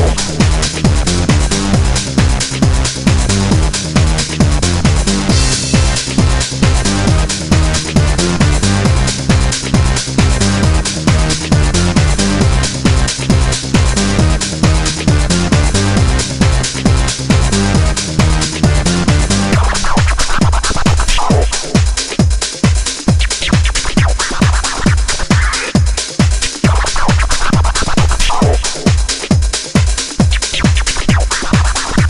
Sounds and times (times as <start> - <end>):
Music: 0.0 - 32.1.